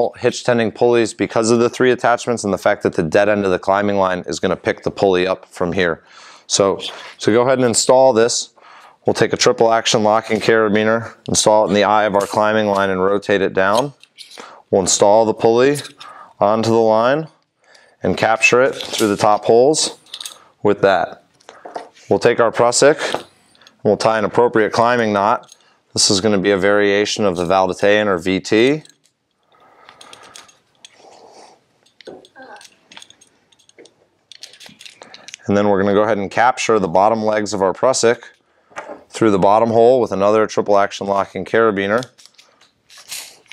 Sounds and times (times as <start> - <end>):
Speech: 0.0 - 8.5, 9.1 - 14.0, 14.7 - 17.3, 18.0 - 20.0, 20.6 - 21.2, 22.1 - 23.2, 23.8 - 25.4, 26.0 - 28.9, 35.4 - 38.4, 39.1 - 42.1.